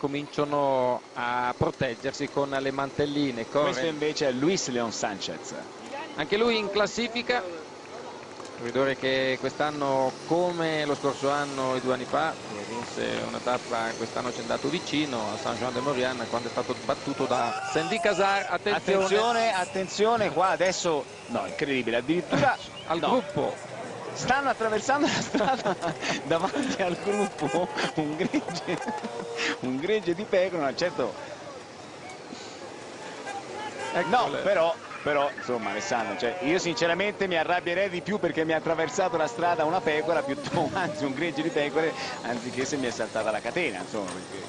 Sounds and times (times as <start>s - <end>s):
Speech: 0.0s - 7.7s, 8.6s - 23.6s, 33.2s - 44.4s.